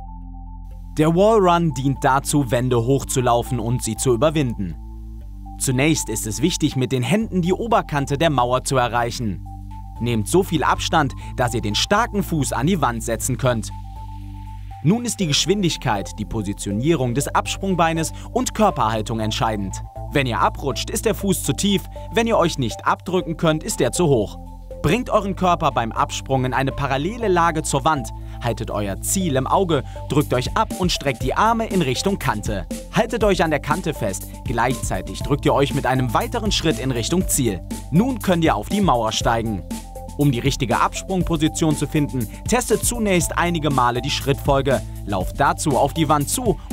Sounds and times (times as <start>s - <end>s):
Music: 0.0s - 46.7s
Speech: 1.0s - 4.8s, 5.6s - 9.4s, 10.0s - 13.8s, 14.8s - 39.6s, 40.2s - 46.7s.